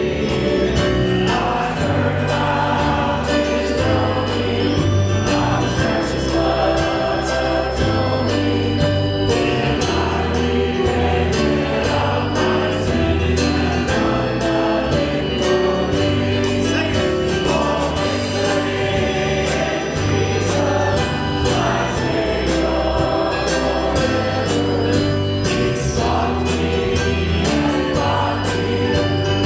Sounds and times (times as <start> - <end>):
Gospel music: 0.0 - 29.4.